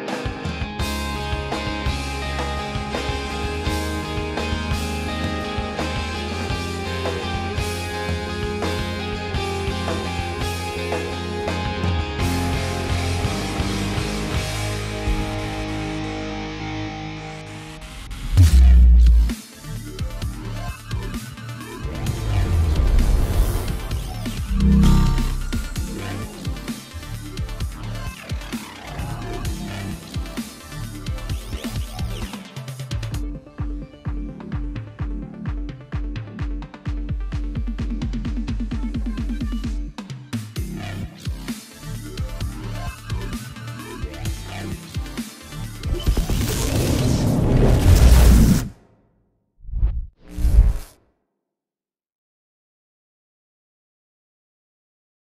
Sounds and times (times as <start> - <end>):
Exciting music: 0.0 - 33.3.